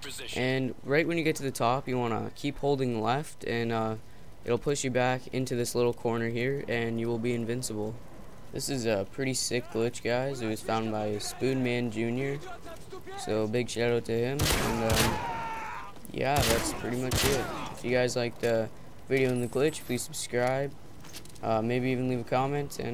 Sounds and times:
Speech: 0:08.6 - 0:15.2, 0:16.1 - 0:20.7, 0:21.4 - 0:22.9.

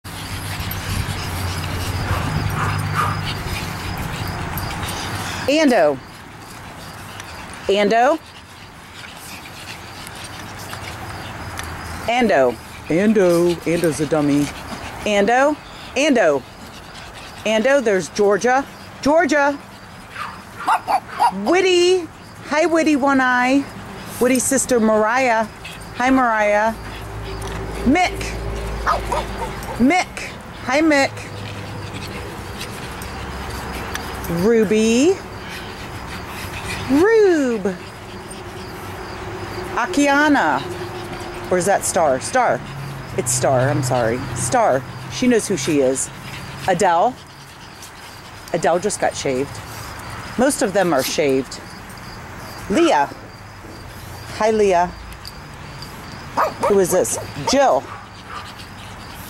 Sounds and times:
Dog: 0:00.1 - 0:21.7, 0:24.0 - 0:39.2, 0:55.7 - 0:59.2
Speech: 0:07.7 - 0:08.2, 0:12.1 - 0:16.4, 0:17.4 - 0:19.6, 0:21.4 - 0:26.8, 0:36.9 - 0:37.8, 0:50.4 - 0:51.6, 0:52.7 - 0:53.2, 0:56.6 - 0:57.9.

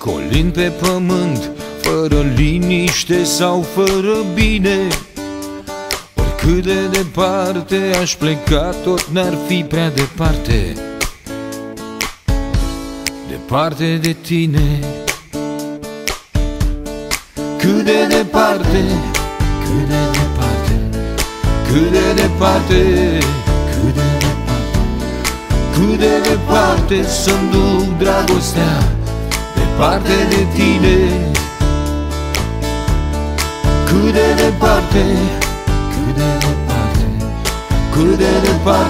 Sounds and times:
Music: 0:00.0 - 0:38.8.

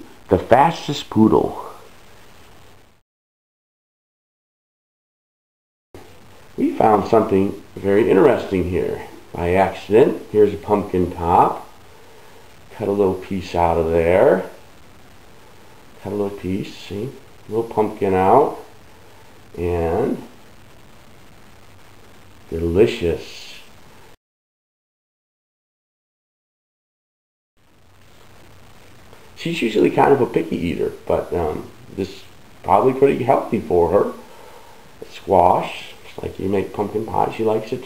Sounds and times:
Speech: 0:00.0 - 0:01.9, 0:06.6 - 0:11.7, 0:12.7 - 0:14.6, 0:16.0 - 0:18.7, 0:19.6 - 0:20.3, 0:22.5 - 0:23.7, 0:29.4 - 0:34.2, 0:35.0 - 0:37.8.

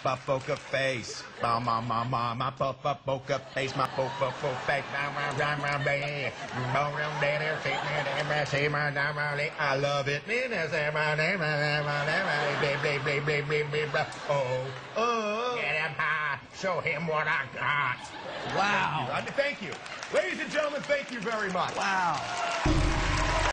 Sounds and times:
Speech: 0:00.0 - 0:22.3.

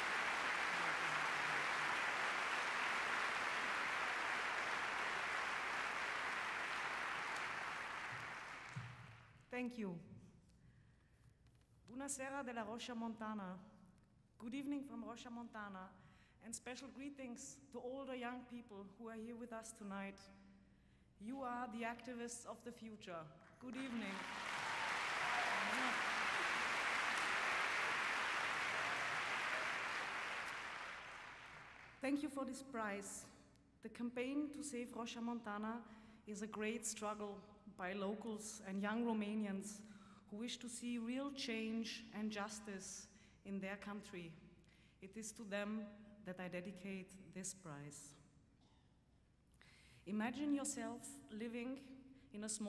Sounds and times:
Narration, monologue: 0:09.3 - 0:24.1, 0:32.0 - 0:52.6
Female speech, woman speaking: 0:09.5 - 0:10.2, 0:11.9 - 0:13.7, 0:14.4 - 0:20.3, 0:21.2 - 0:24.3, 0:32.0 - 0:44.4, 0:45.0 - 0:48.2, 0:50.1 - 0:52.6.

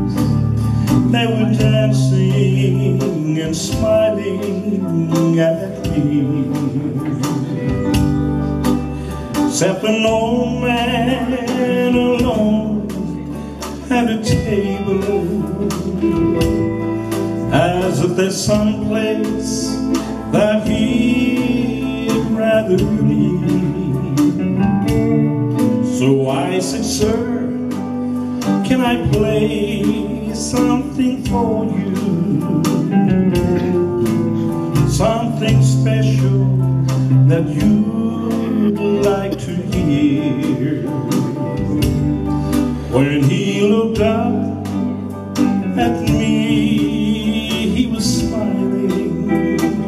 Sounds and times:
Music: 0:00.0 - 0:49.8
Male singing: 0:00.9 - 0:08.1, 0:09.4 - 0:16.8, 0:17.4 - 0:24.6, 0:25.8 - 0:27.8, 0:28.5 - 0:33.8, 0:34.8 - 0:42.0, 0:42.9 - 0:49.8.

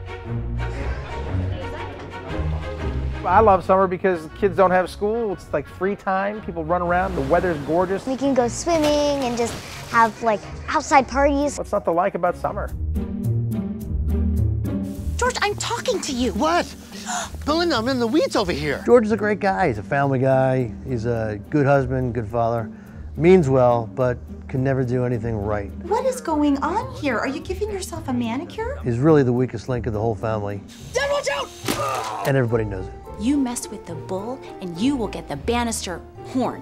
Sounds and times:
Music: 0:00.0 - 0:36.6.

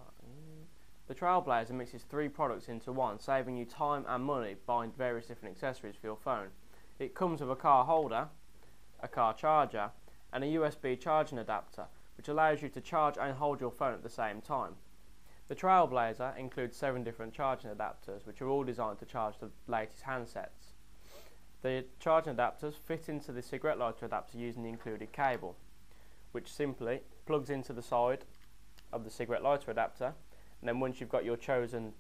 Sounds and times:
Speech: 0:00.0 - 0:08.4, 0:09.0 - 0:14.8, 0:15.5 - 0:20.8, 0:21.6 - 0:25.6, 0:26.3 - 0:28.3, 0:28.9 - 0:32.0.

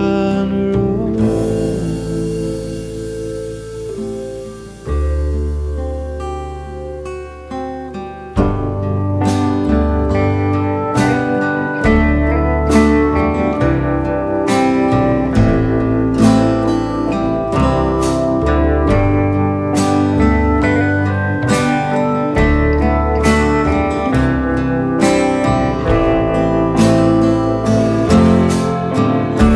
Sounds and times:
Acoustic guitar: 0:00.0 - 0:29.5.

